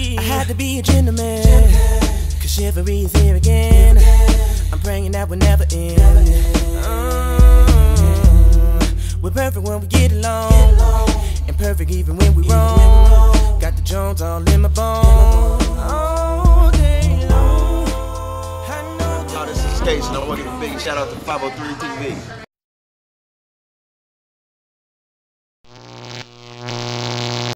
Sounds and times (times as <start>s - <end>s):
Music: 0.0s - 20.9s
Singing: 0.0s - 21.6s
Speech: 19.0s - 22.5s.